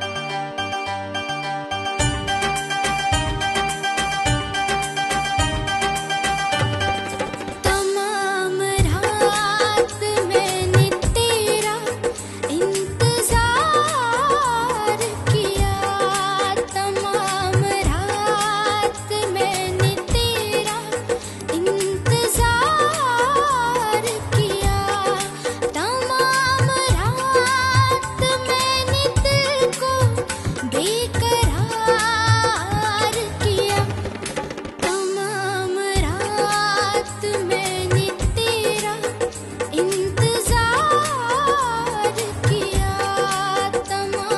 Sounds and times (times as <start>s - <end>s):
Music: 0.0s - 44.3s.